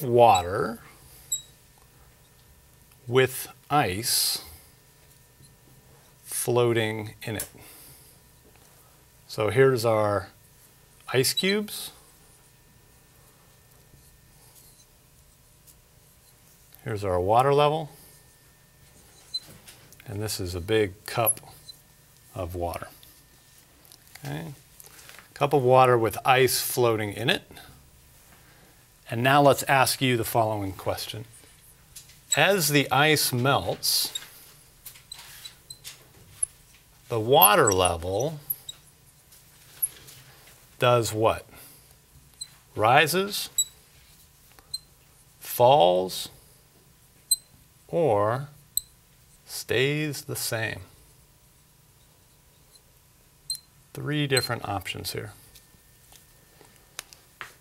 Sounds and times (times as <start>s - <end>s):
Speech: 0.0s - 1.0s, 3.1s - 4.6s, 6.2s - 7.6s, 9.3s - 10.4s, 11.1s - 12.0s, 16.8s - 18.0s, 20.0s - 21.6s, 22.3s - 23.0s, 24.2s - 24.6s, 25.4s - 27.7s, 29.0s - 31.3s, 32.3s - 34.2s, 37.1s - 38.5s, 40.8s - 41.6s, 42.8s - 43.6s, 45.4s - 46.4s, 47.9s - 48.6s, 49.5s - 51.0s, 53.9s - 55.5s.